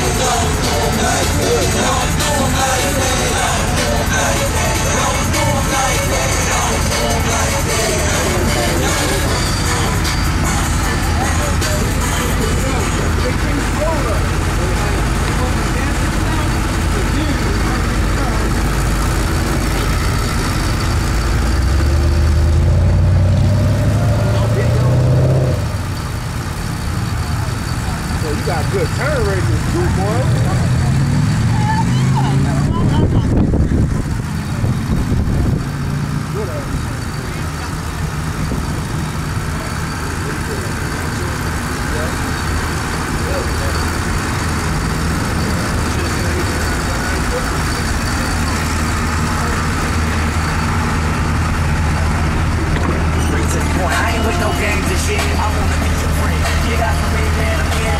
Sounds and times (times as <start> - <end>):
Speech: 11.1 - 18.7, 27.3 - 33.4, 36.3 - 38.2, 39.4 - 42.4, 43.1 - 44.0.